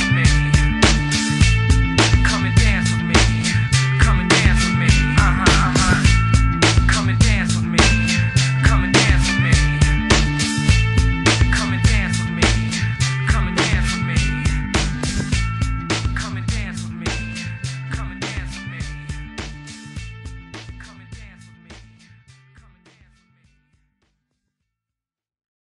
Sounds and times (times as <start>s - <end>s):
Music: 0.0s - 24.6s.